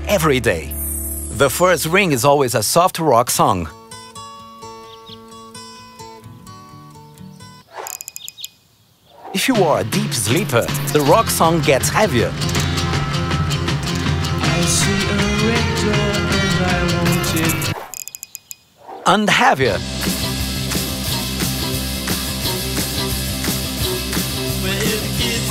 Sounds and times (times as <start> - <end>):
Music: 0.0 - 2.4, 3.4 - 7.6, 9.6 - 17.8, 19.6 - 25.5
Speech: 0.0 - 3.7, 9.3 - 12.4, 19.1 - 19.8.